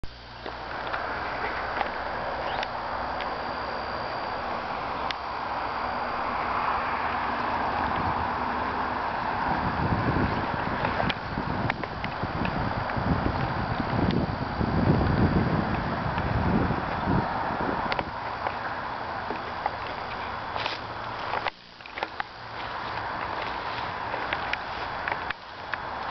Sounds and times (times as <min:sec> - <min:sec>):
Vehicle: 0:00.0 - 0:26.1.